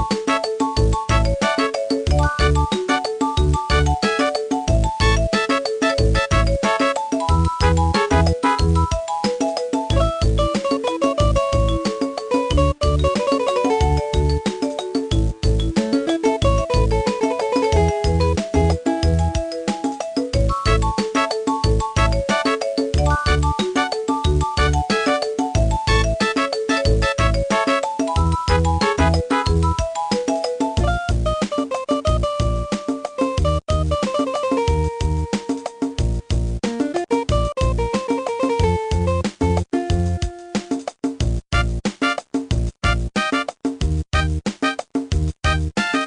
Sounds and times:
Music: 0:00.0 - 0:46.0.

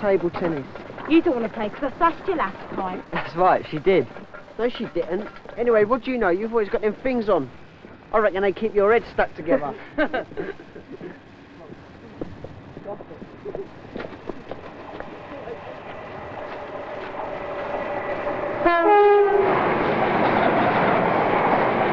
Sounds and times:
Train: 0:00.0 - 0:21.9
Vehicle horn, car horn, honking: 0:18.6 - 0:19.4.

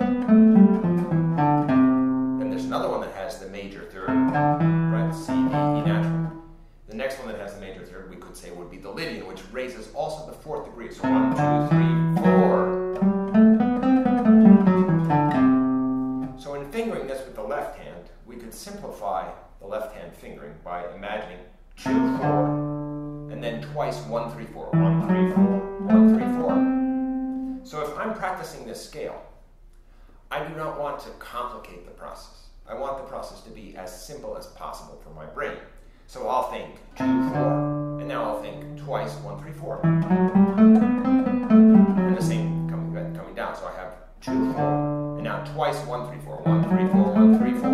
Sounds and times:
Acoustic guitar: 0:00.0 - 0:02.8, 0:04.1 - 0:06.5, 0:11.0 - 0:16.4, 0:21.8 - 0:27.7, 0:37.0 - 0:43.2, 0:44.2 - 0:47.7
Speech: 0:02.4 - 0:06.2, 0:06.9 - 0:12.8, 0:16.4 - 0:22.6, 0:23.3 - 0:26.6, 0:27.6 - 0:29.4, 0:30.3 - 0:39.9, 0:42.1 - 0:44.6, 0:45.2 - 0:47.7.

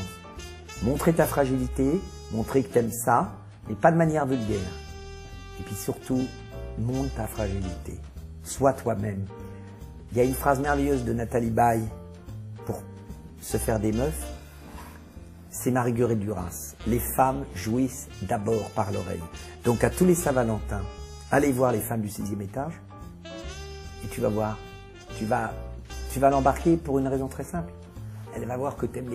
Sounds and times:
Music: 0:00.0 - 0:29.1
Speech: 0:00.8 - 0:04.8, 0:05.6 - 0:09.3, 0:10.1 - 0:12.0, 0:12.6 - 0:14.3, 0:15.5 - 0:22.8, 0:24.0 - 0:27.7, 0:28.3 - 0:29.1.

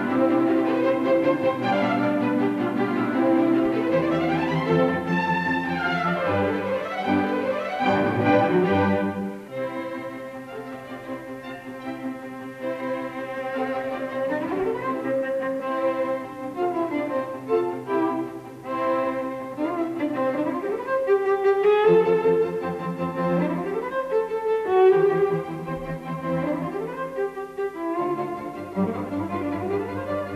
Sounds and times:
Cello: 0:00.0 - 0:30.3
Classical music: 0:00.0 - 0:30.3
Orchestra: 0:00.0 - 0:30.3.

